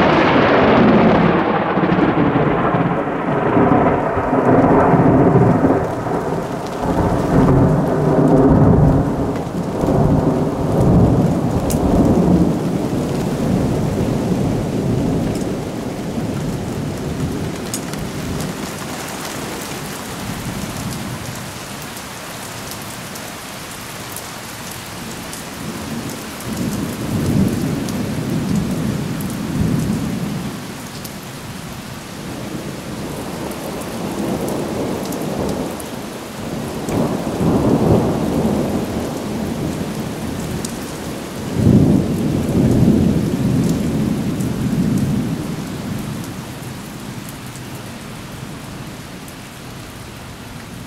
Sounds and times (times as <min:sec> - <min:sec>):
Rain on surface: 0:00.0 - 0:50.8.